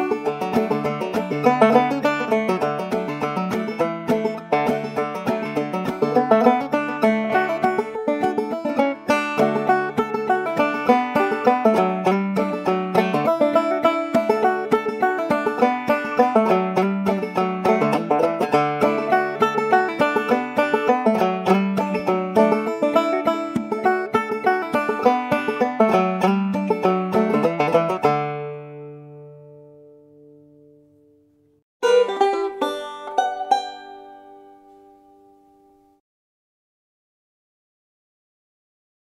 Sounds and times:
Banjo: 0.0 - 30.4, 31.8 - 35.7.

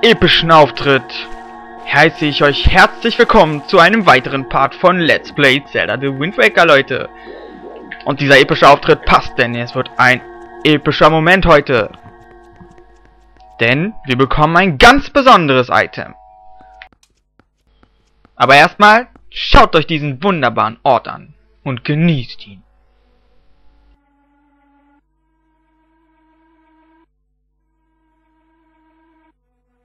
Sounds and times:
Speech: 0.0 - 1.3, 1.9 - 7.1, 8.0 - 12.0, 13.6 - 16.2, 18.4 - 22.6
Music: 0.0 - 15.9, 21.2 - 29.8.

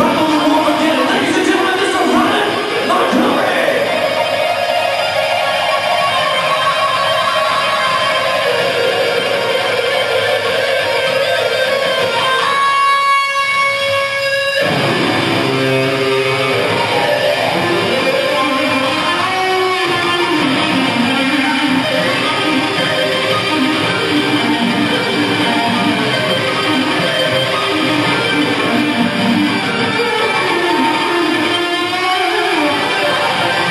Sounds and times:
Guitar: 0.0 - 33.7.

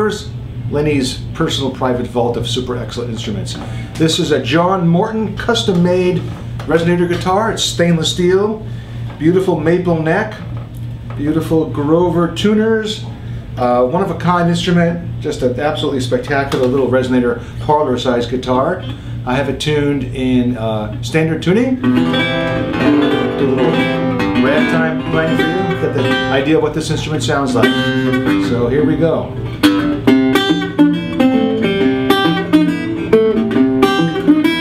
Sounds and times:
Speech: 0.0 - 8.6, 9.2 - 10.5, 11.2 - 21.8, 23.3 - 23.8, 24.4 - 27.8, 28.4 - 29.3
Guitar: 0.0 - 34.6.

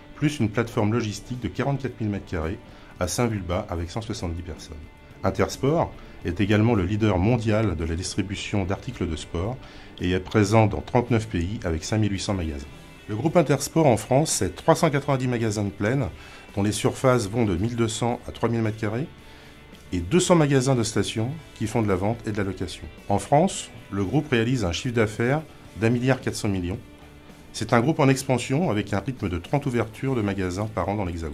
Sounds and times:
Music: 0.0 - 31.3
Speech: 0.2 - 19.1, 19.9 - 26.9, 27.5 - 31.3.

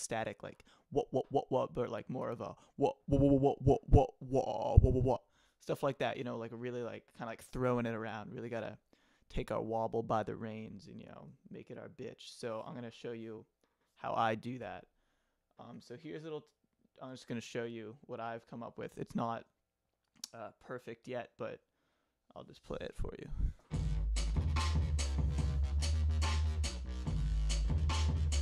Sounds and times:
Speech: 0.0 - 14.9, 15.6 - 19.6, 20.3 - 21.6, 22.3 - 23.6.

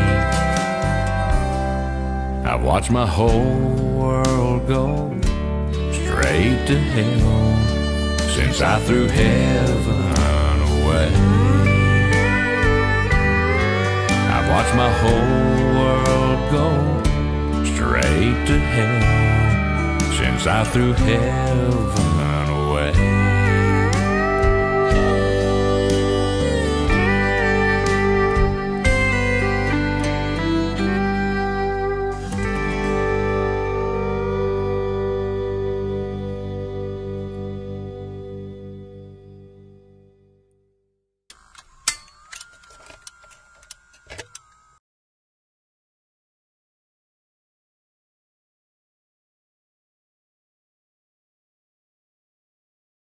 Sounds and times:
Music: 0.0 - 40.9.

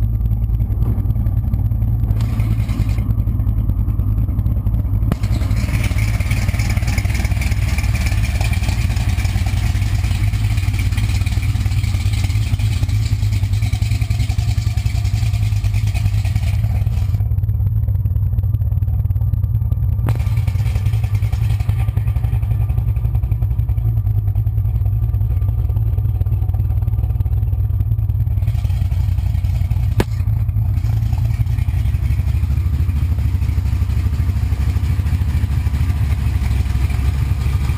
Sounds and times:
Car: 0.0 - 37.7.

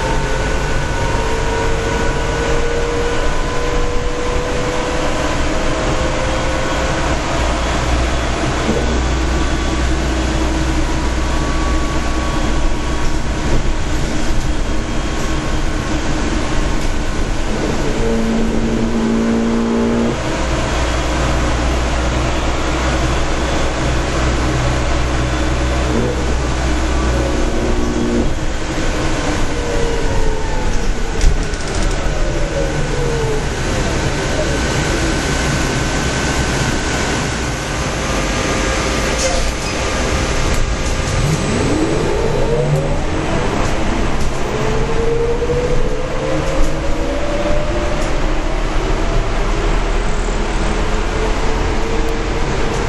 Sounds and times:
Train: 0.0 - 52.8.

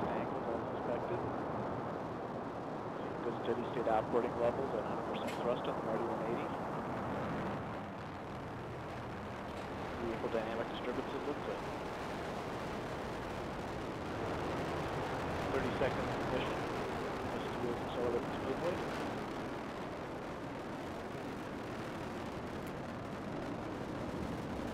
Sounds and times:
Speech: 0.0 - 1.3, 3.1 - 6.6, 10.0 - 11.6, 15.5 - 16.6, 17.4 - 18.8.

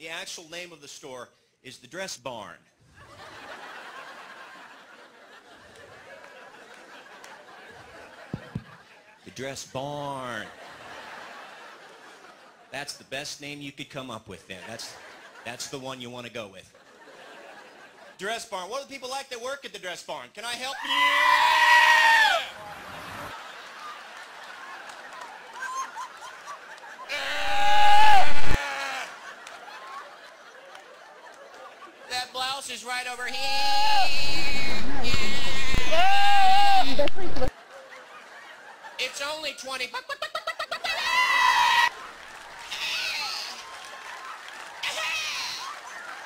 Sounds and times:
Speech: 0.0 - 2.6, 9.2 - 10.6, 12.7 - 16.8, 18.2 - 20.9, 32.1 - 33.6, 39.0 - 40.1.

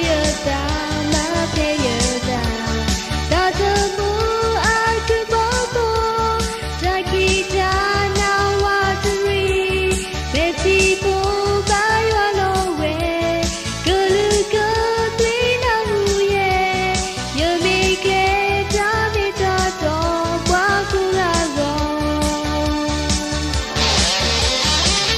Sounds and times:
Music: 0.0 - 25.1.

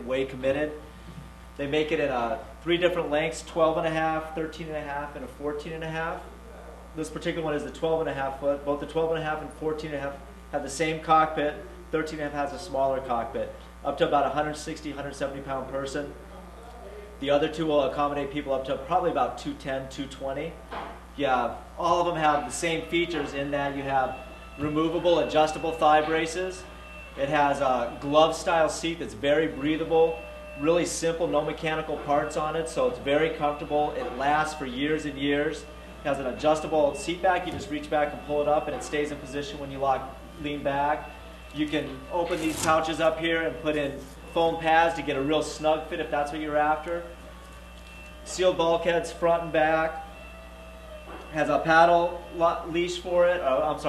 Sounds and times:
Speech: 0.0 - 0.8, 1.6 - 20.6, 21.2 - 41.0, 41.6 - 47.1, 48.3 - 50.0, 51.4 - 53.8.

